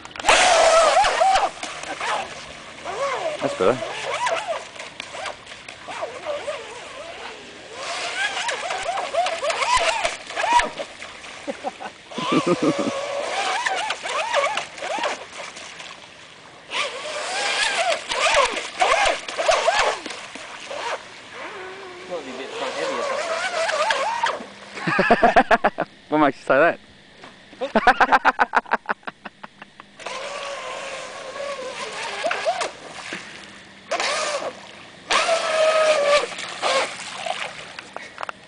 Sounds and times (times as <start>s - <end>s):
Motorboat, speedboat: 0.0s - 25.4s, 29.1s - 38.4s.